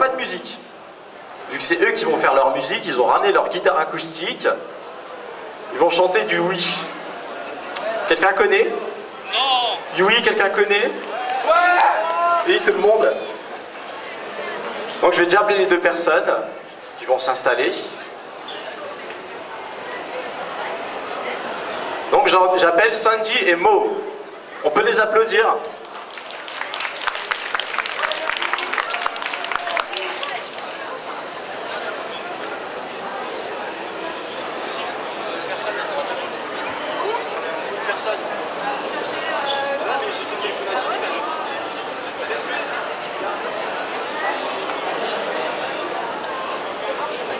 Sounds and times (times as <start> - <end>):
Speech: 0.0 - 0.6, 1.5 - 4.6, 7.8 - 13.4, 15.0 - 18.1, 20.6 - 25.8.